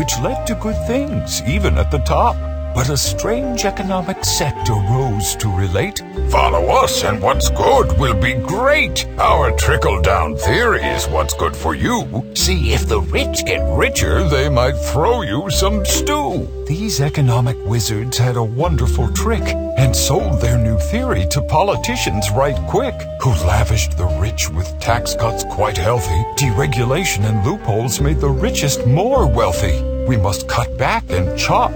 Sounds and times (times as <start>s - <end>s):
Music: 0.0s - 31.7s
Speech: 0.0s - 31.7s.